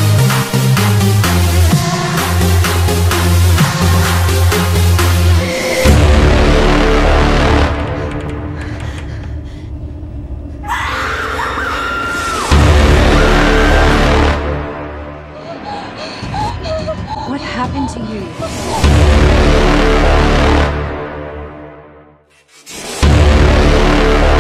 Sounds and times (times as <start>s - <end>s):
Music: 0.0s - 24.4s
Speech: 17.3s - 18.4s.